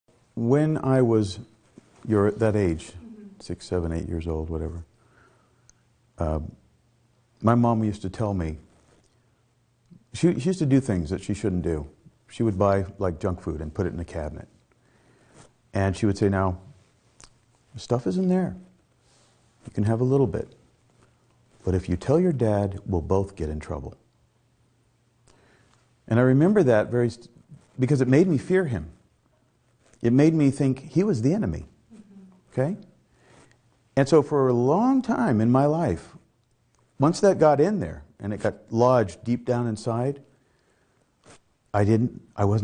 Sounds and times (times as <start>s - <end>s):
Speech: 0.4s - 4.9s, 6.2s - 6.6s, 7.4s - 8.7s, 10.1s - 14.5s, 15.8s - 16.7s, 17.8s - 18.7s, 19.7s - 20.6s, 21.6s - 24.0s, 26.1s - 29.0s, 30.0s - 32.9s, 34.0s - 36.2s, 37.0s - 40.3s, 41.8s - 42.6s.